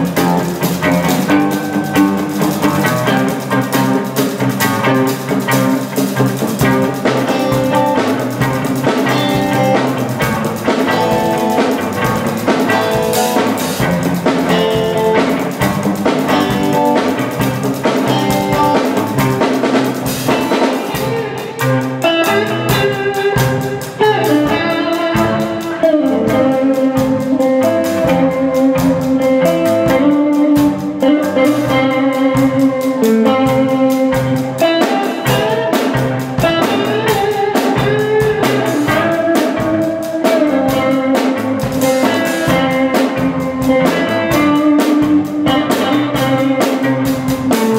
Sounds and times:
Rhythm and blues: 0.0 - 47.7.

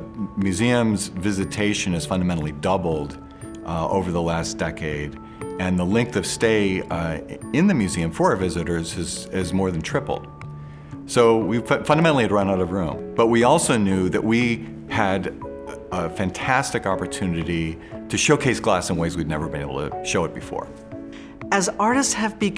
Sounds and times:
Speech: 0.0 - 10.3, 11.1 - 20.7, 21.6 - 22.5
Music: 0.0 - 22.5.

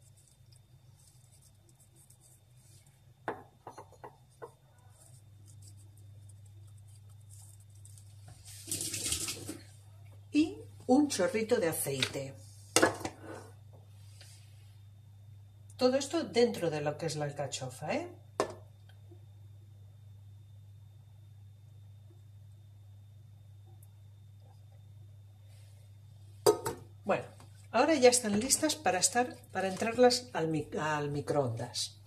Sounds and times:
Speech: 10.3 - 12.4, 15.8 - 18.2, 27.0 - 32.0.

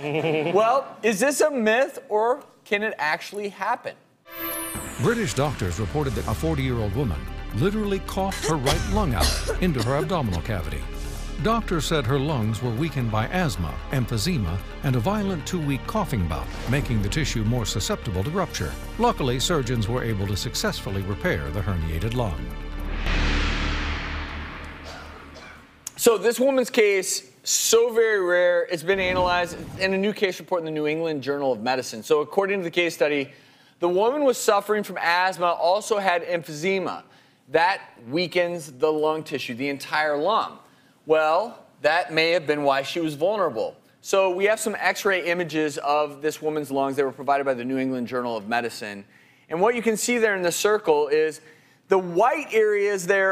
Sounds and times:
Speech: 0.5 - 4.0, 5.0 - 10.8, 11.4 - 22.5, 25.9 - 53.3.

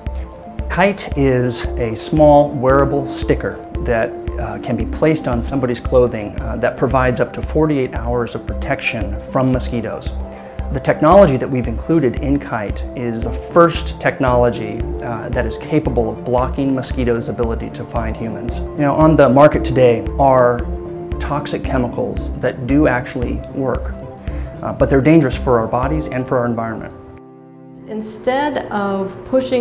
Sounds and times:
Music: 0.0 - 29.6
Speech: 0.7 - 20.6, 24.6 - 26.9.

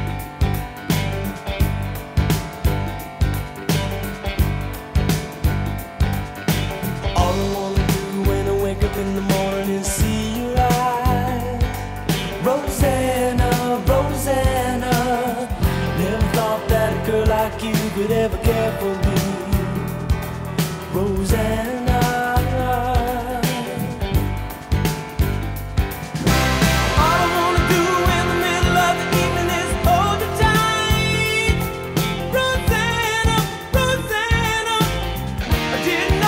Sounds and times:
Rock and roll: 0.0 - 36.2.

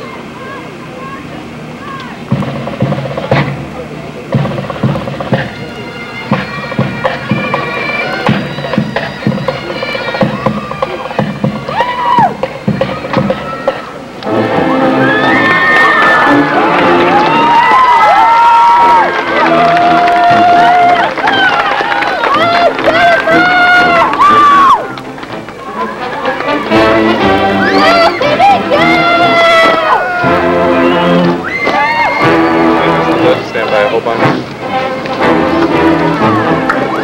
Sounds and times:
Wind instrument, woodwind instrument: 3.3 - 37.0
Bagpipes: 4.3 - 15.1, 22.2 - 37.0.

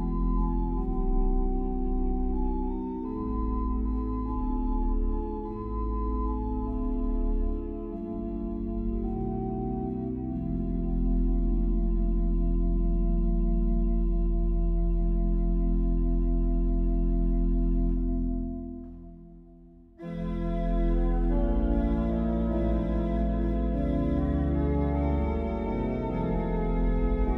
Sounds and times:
Music: 0.0 - 27.3.

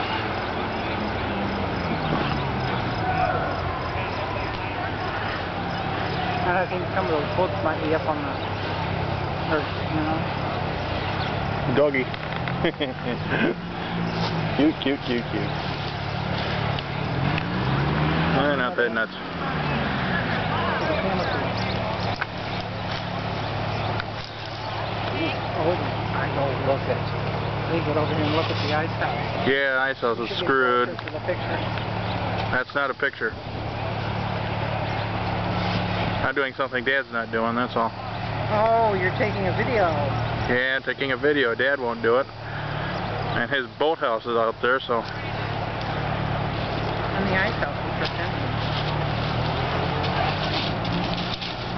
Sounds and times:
Vehicle: 0.0 - 51.7.

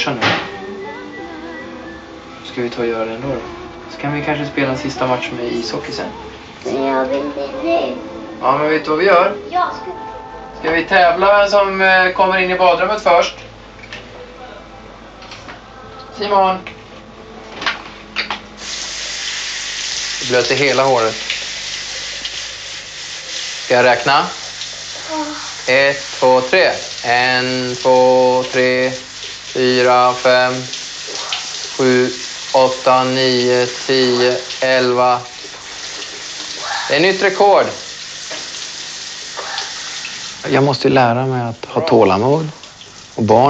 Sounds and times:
Water: 18.6 - 43.5
Water tap, faucet: 18.6 - 43.5.

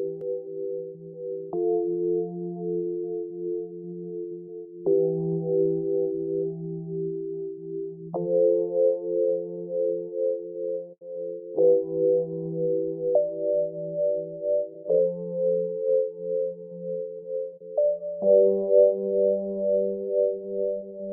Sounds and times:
New-age music: 0.0 - 21.1.

